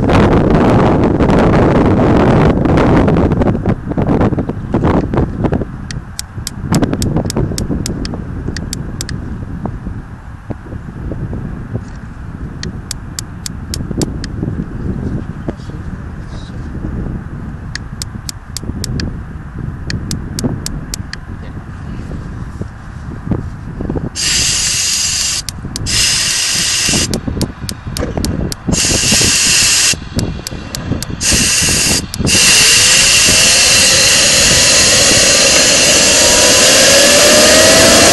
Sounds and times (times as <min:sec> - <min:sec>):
Jet engine: 0:24.2 - 0:38.1.